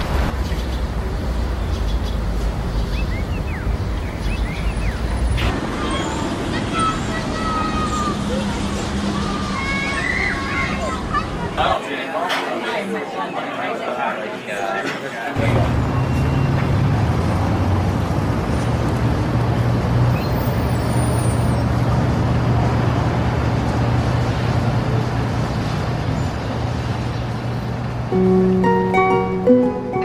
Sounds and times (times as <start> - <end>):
Speech: 5.8 - 15.8.